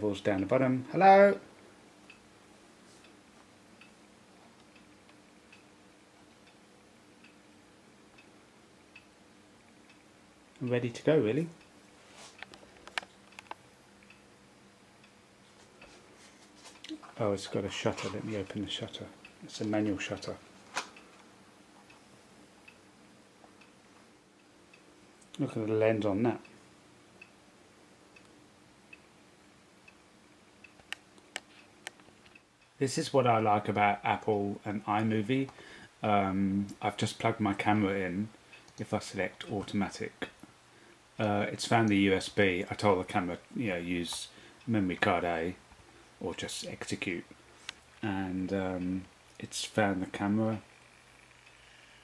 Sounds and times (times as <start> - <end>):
Speech: 0.0 - 1.5, 10.6 - 11.6, 16.9 - 20.4, 25.4 - 26.5, 32.8 - 40.4, 41.2 - 45.6, 46.2 - 47.3, 48.0 - 50.7.